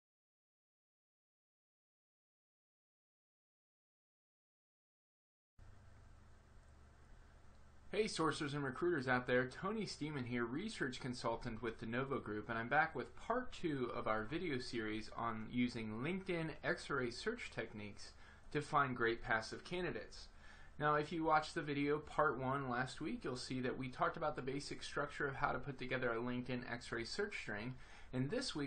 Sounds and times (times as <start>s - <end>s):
Speech: 7.9s - 28.6s.